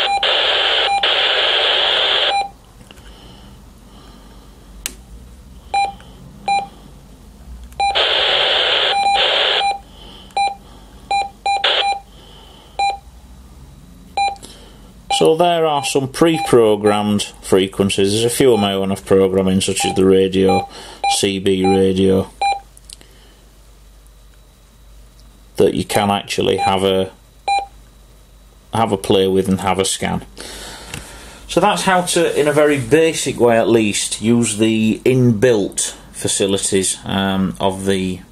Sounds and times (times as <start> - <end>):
Speech: 15.1 - 22.3, 25.6 - 27.2, 28.7 - 30.3, 31.5 - 38.3.